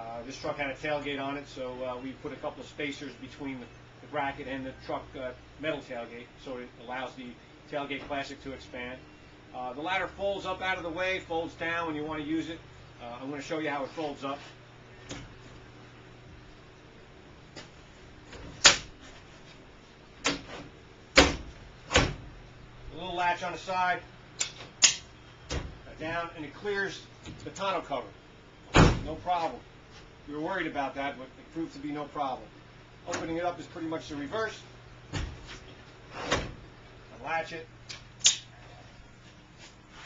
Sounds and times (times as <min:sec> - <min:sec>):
Speech: 0:00.0 - 0:09.0, 0:09.6 - 0:14.5, 0:22.9 - 0:24.1, 0:25.9 - 0:28.2, 0:29.0 - 0:29.6, 0:30.3 - 0:34.7, 0:37.1 - 0:37.7.